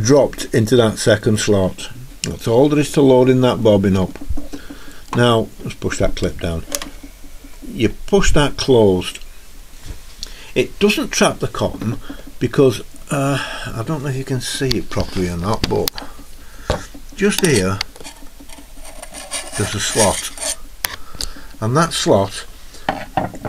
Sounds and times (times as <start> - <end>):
Speech: 0.0 - 4.2, 5.1 - 6.8, 7.7 - 9.2, 10.6 - 16.0, 17.2 - 17.9, 19.6 - 20.4, 21.6 - 22.5.